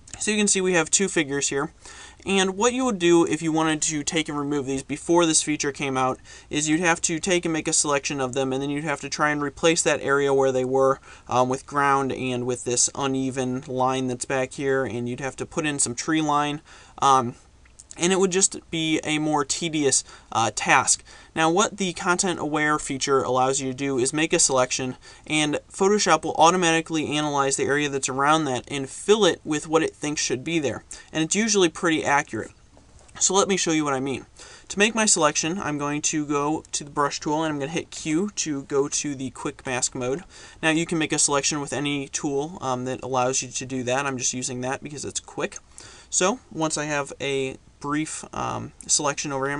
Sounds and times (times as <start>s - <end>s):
Speech: 0.1s - 32.6s, 33.2s - 49.5s.